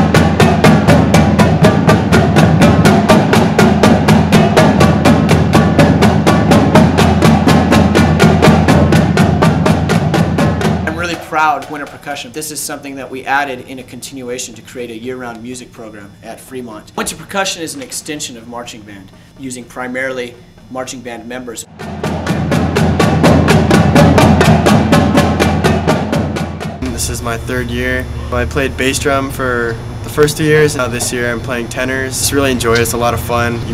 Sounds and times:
Speech: 10.9s - 21.7s, 26.8s - 33.7s.

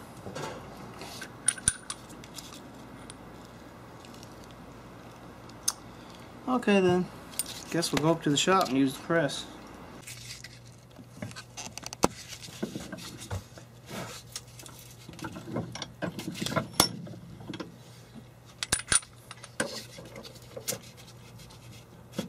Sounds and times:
Speech: 6.5s - 7.1s, 7.7s - 9.6s.

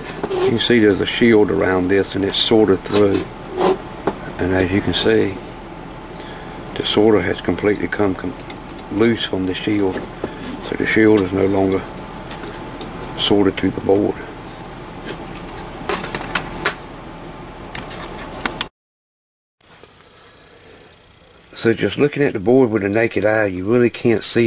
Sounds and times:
Speech: 0.4s - 3.3s, 4.2s - 5.4s, 6.8s - 11.9s, 13.2s - 14.3s, 21.5s - 24.4s.

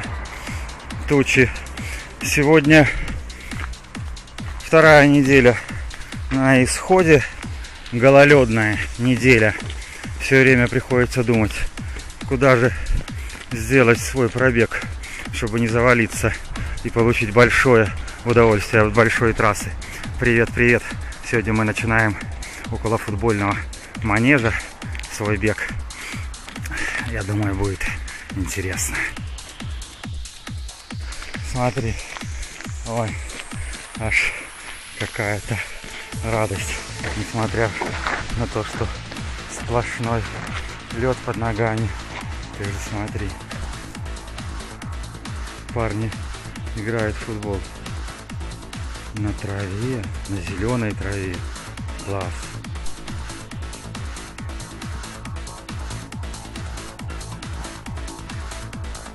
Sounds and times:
Music: 0.0s - 59.1s
Outside, urban or manmade: 0.0s - 59.1s
Speech: 1.1s - 1.6s, 2.2s - 3.0s, 4.6s - 5.6s, 6.3s - 7.3s, 7.9s - 9.6s, 10.2s - 11.6s, 12.3s - 12.8s, 13.5s - 25.8s, 27.0s - 29.2s, 31.4s - 32.0s, 32.8s - 33.2s, 34.0s - 34.4s, 35.0s - 38.9s, 39.5s - 42.0s, 42.6s - 43.4s, 45.7s - 47.6s, 49.2s - 51.4s, 52.0s - 52.4s.

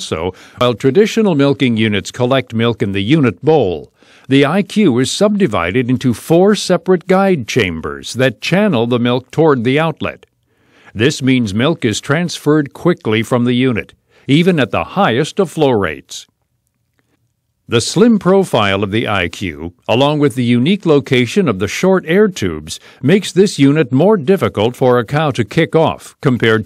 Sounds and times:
Speech: 0.0s - 10.3s, 10.9s - 16.3s, 17.7s - 26.6s.

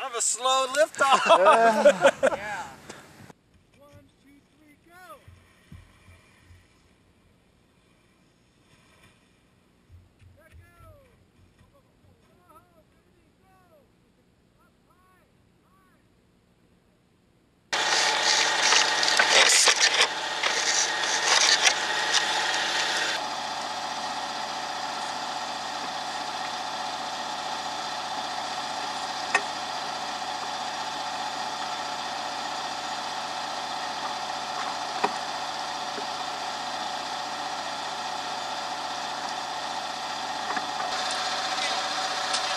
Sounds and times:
Speech: 0.0s - 2.8s, 3.8s - 5.2s, 10.4s - 16.1s.

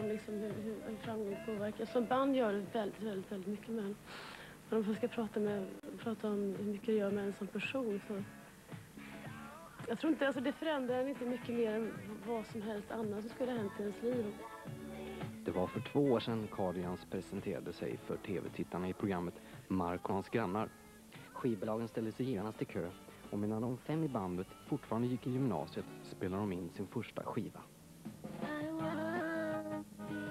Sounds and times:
Speech: 0.0s - 4.0s, 4.7s - 8.2s, 9.8s - 14.4s, 15.5s - 20.7s, 21.3s - 27.7s
Music: 0.0s - 30.3s.

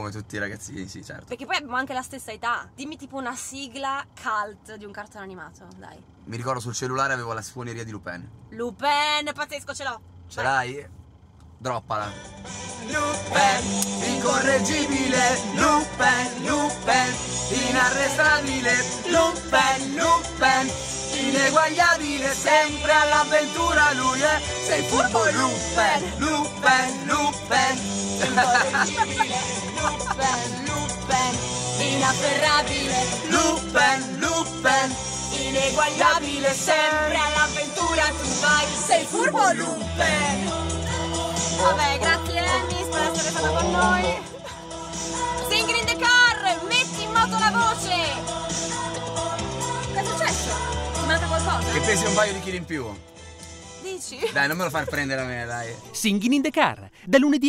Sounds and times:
Choir: 12.7s - 52.2s
Male singing: 12.8s - 44.5s, 51.7s - 52.5s.

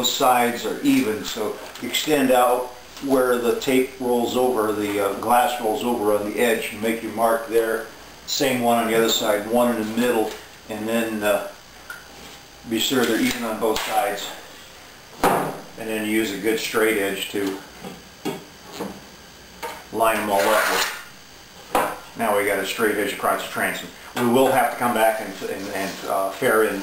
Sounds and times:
Speech: 0.0s - 11.6s, 12.7s - 14.4s, 15.8s - 17.7s, 19.9s - 20.9s, 22.2s - 26.8s.

